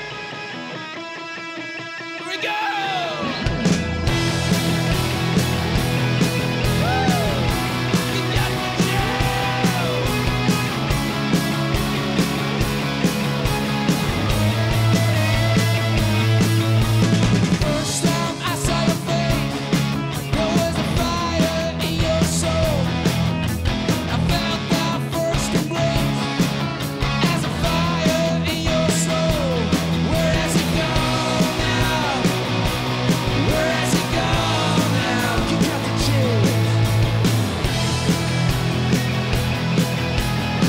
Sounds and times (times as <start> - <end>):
Music: 0.0 - 40.6.